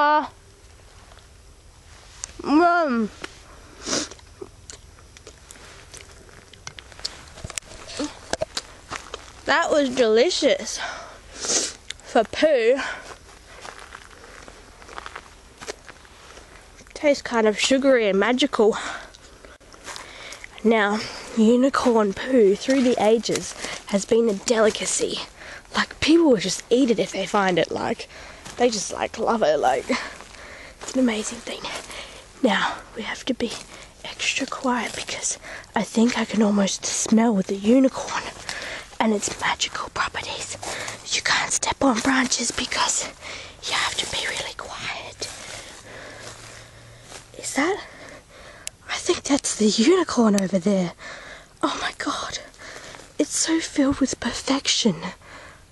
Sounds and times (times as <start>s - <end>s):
Speech: 0.0s - 0.3s, 9.5s - 10.9s, 12.1s - 13.0s, 17.0s - 19.0s, 20.6s - 30.2s, 30.9s - 38.4s, 39.0s - 45.4s, 47.4s - 47.9s, 48.9s - 51.0s, 53.2s - 55.2s.